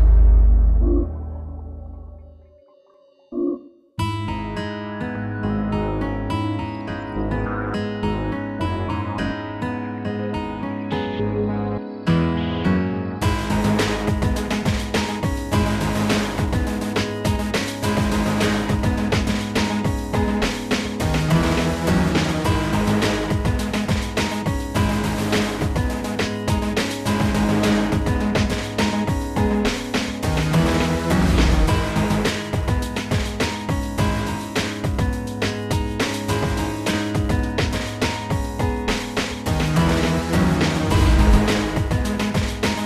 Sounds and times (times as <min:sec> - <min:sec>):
Music: 0:00.0 - 0:42.8.